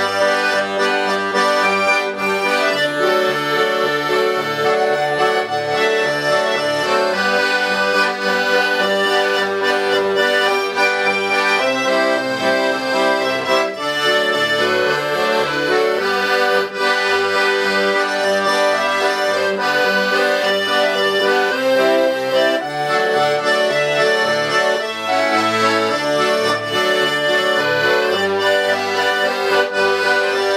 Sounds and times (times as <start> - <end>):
Accordion: 0.0 - 30.5.